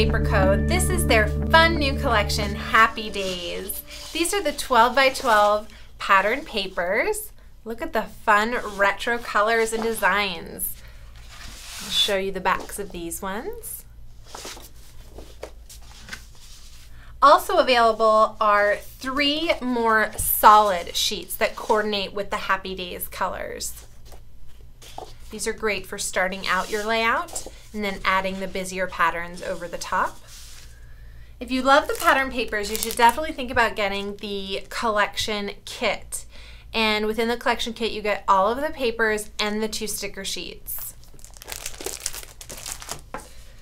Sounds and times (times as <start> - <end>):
Speech: 0.0 - 10.8, 11.8 - 13.8, 17.2 - 23.8, 25.3 - 30.2, 31.4 - 41.0.